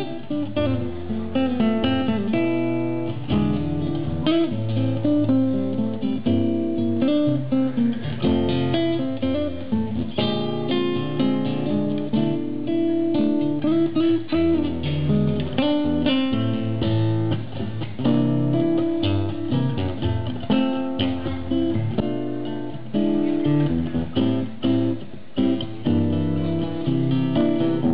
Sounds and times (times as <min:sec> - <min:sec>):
Acoustic guitar: 0:00.0 - 0:27.9
Strum: 0:00.0 - 0:27.9.